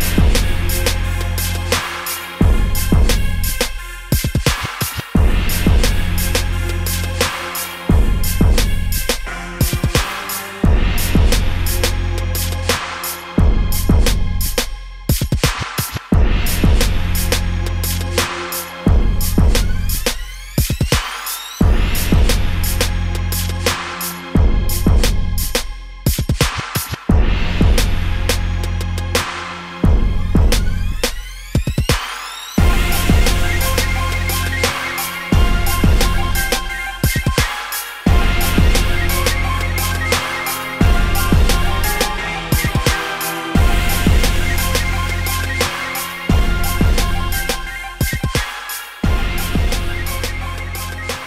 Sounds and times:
Music: 0.0 - 51.2.

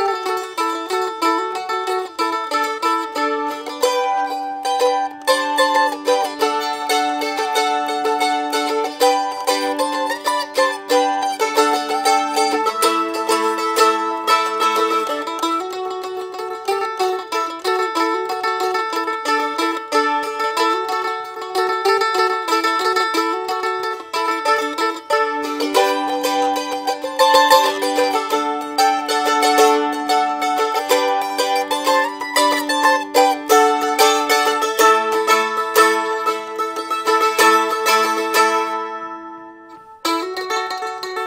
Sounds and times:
Traditional music: 0.0 - 41.2.

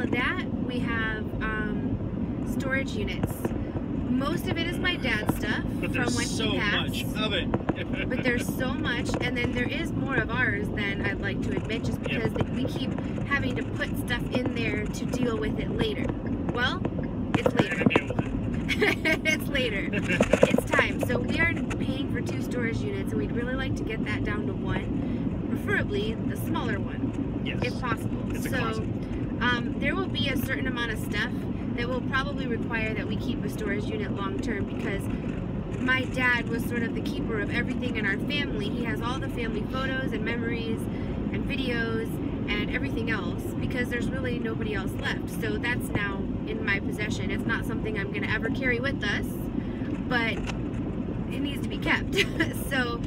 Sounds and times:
Car: 0.0 - 53.0.

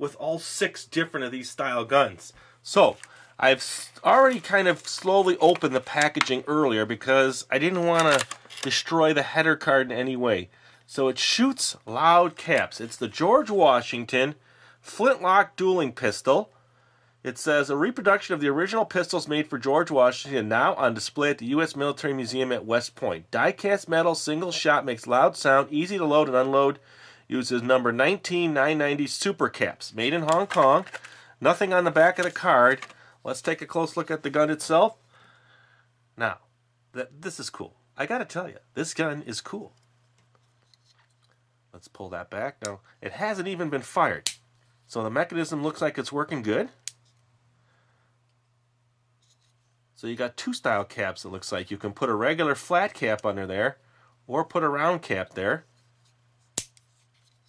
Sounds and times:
Speech: 0.0 - 16.5, 17.2 - 35.0, 36.2 - 39.8, 41.7 - 44.2, 44.9 - 46.8, 50.0 - 55.7.

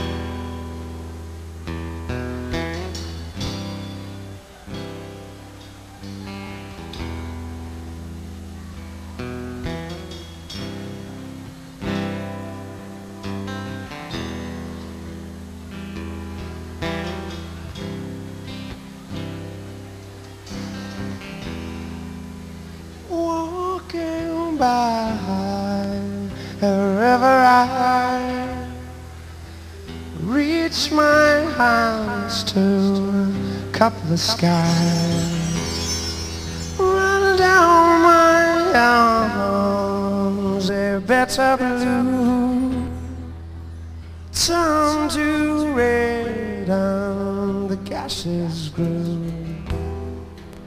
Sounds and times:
Music: 0.0 - 50.6.

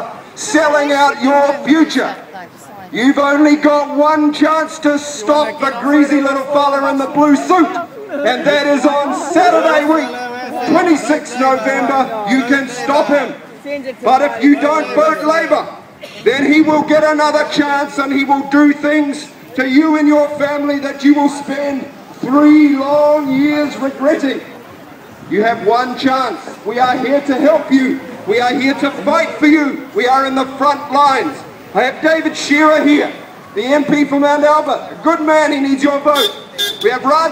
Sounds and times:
Male speech, man speaking: 0.0 - 2.3, 2.9 - 13.4, 14.0 - 24.5, 25.3 - 37.3
Narration, monologue: 0.0 - 37.3.

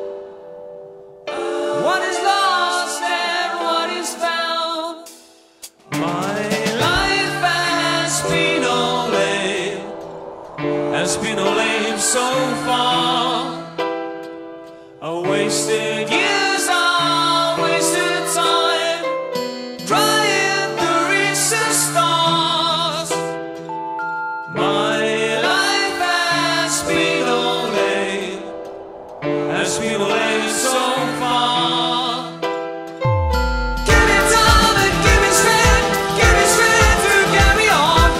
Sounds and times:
Music: 0.0 - 38.1.

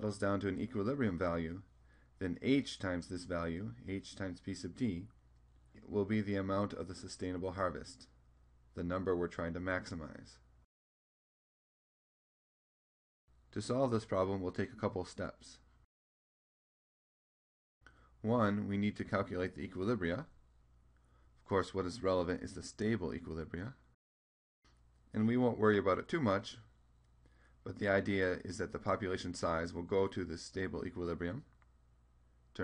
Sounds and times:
Speech: 0.0 - 5.2, 5.8 - 10.5, 13.5 - 15.7, 18.2 - 20.4, 21.4 - 23.9, 25.1 - 26.7, 27.6 - 31.6.

